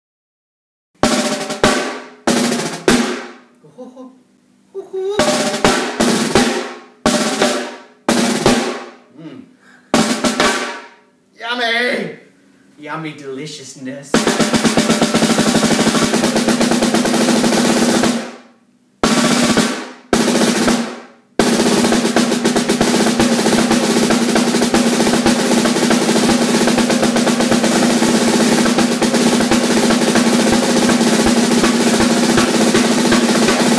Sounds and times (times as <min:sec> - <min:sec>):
Music: 0:01.0 - 0:03.4, 0:05.2 - 0:09.0, 0:09.9 - 0:11.1, 0:14.1 - 0:33.7
Speech: 0:11.4 - 0:14.2.